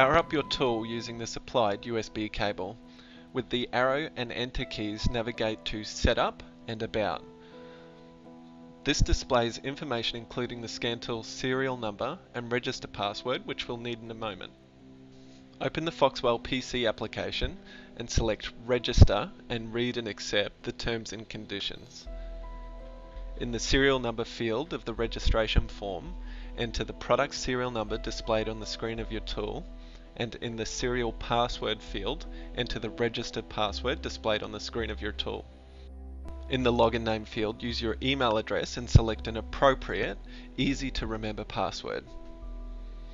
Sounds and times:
Speech: 0.0 - 2.8, 3.4 - 7.2, 8.9 - 14.5, 15.6 - 22.1, 23.4 - 29.6, 30.2 - 35.5, 36.5 - 42.1
Music: 0.0 - 43.1.

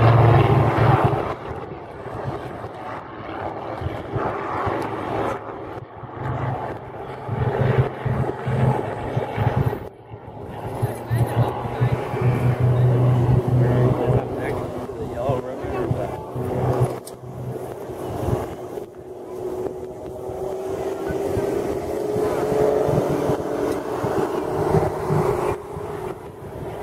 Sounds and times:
Aircraft: 0.0 - 26.8
Speech: 10.4 - 16.5.

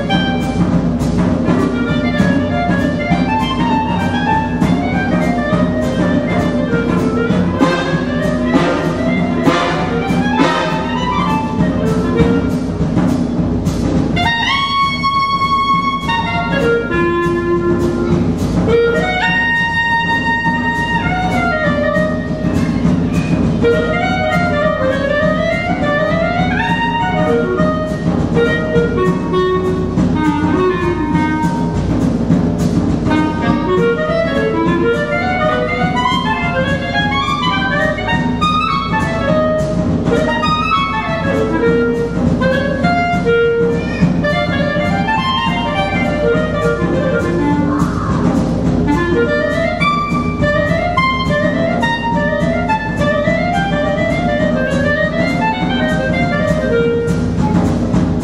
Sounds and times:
Orchestra: 0.0 - 58.2.

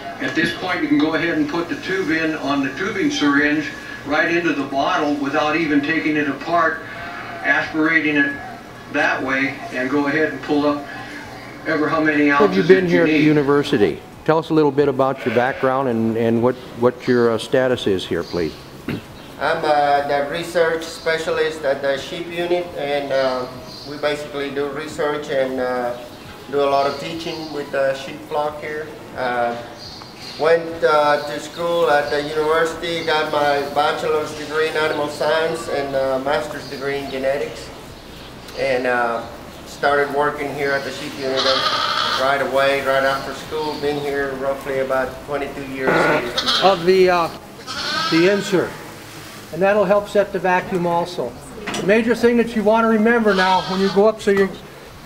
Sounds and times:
Speech: 7.4 - 18.6, 19.4 - 29.7, 30.4 - 37.7, 38.5 - 47.4, 48.1 - 48.8, 49.5 - 54.6.

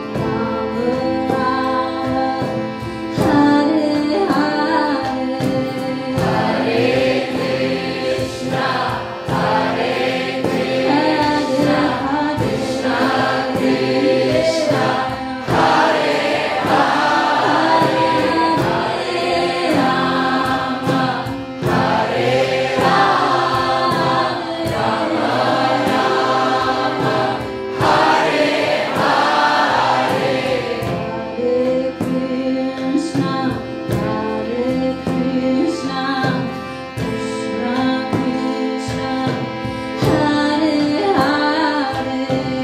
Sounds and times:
Female singing: 0.0 - 6.6, 10.8 - 15.3, 31.4 - 42.6
Choir: 0.0 - 32.2
Acoustic guitar: 0.0 - 42.6
Bowed string instrument: 0.0 - 42.6
Inside, large room or hall: 0.0 - 42.6
Music of Asia: 0.0 - 42.6.

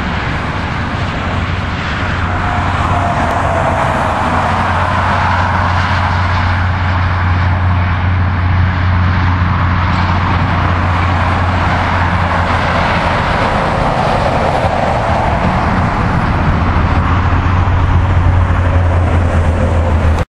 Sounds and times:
Truck: 0.0 - 20.2.

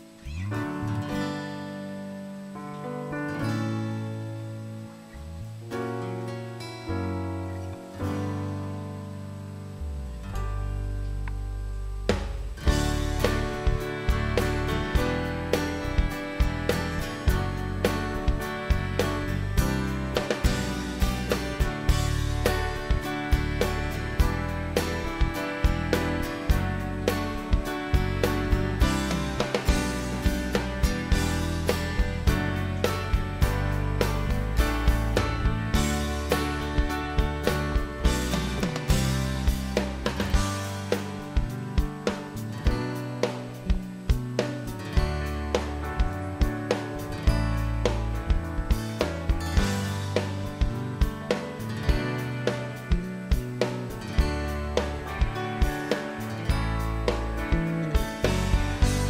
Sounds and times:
Music: 0.0 - 59.0.

